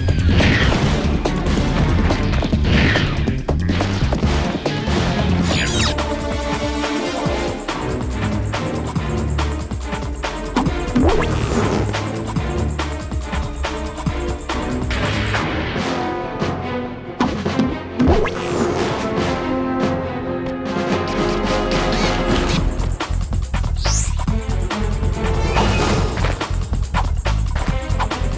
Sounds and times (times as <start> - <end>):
Music: 0.0 - 28.3.